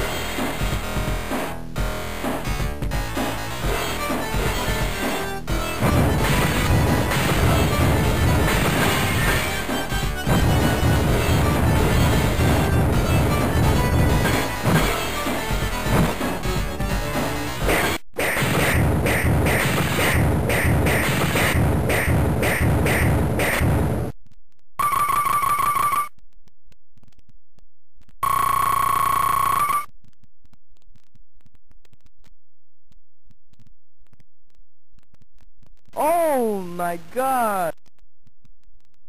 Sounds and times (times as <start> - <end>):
Speech: 36.0 - 37.8.